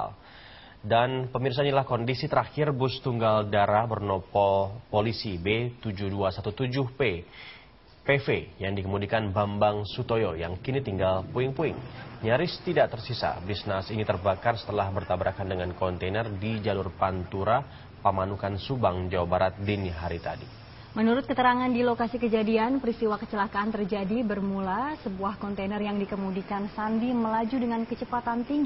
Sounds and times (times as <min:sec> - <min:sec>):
Vehicle: 0:10.2 - 0:28.6.